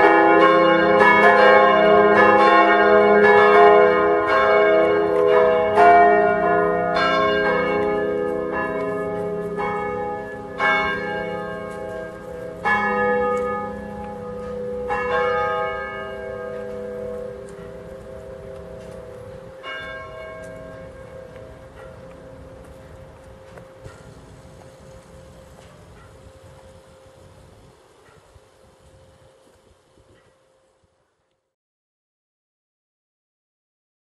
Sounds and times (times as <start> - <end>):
Church bell: 0.0 - 30.8.